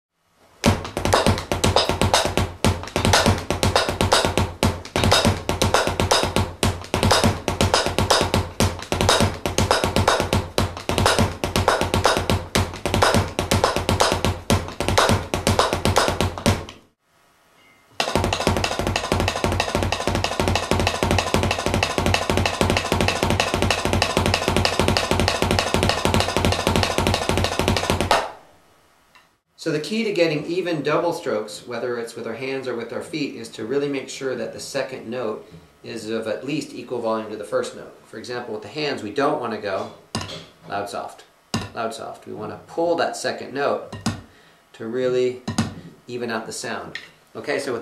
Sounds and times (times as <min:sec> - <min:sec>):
Bass drum: 0:00.6 - 0:16.9, 0:18.0 - 0:28.3.